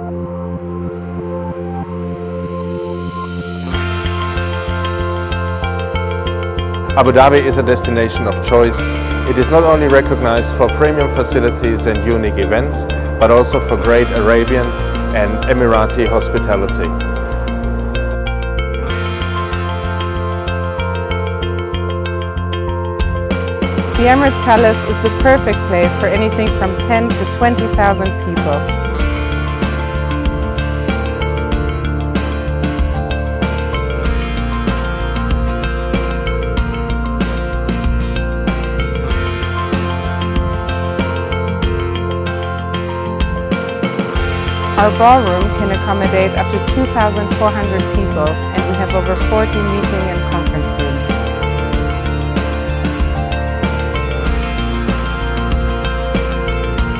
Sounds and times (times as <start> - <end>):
Music: 0.0 - 56.9
Speech: 7.0 - 16.9, 24.0 - 28.6, 44.8 - 51.0.